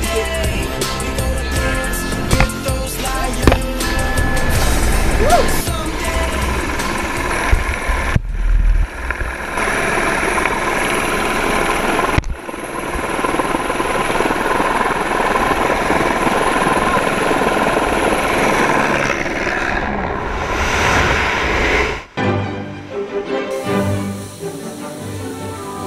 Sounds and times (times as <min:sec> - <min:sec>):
Music: 0:00.0 - 0:07.6, 0:22.2 - 0:25.8
Helicopter: 0:00.0 - 0:20.5, 0:24.2 - 0:25.8.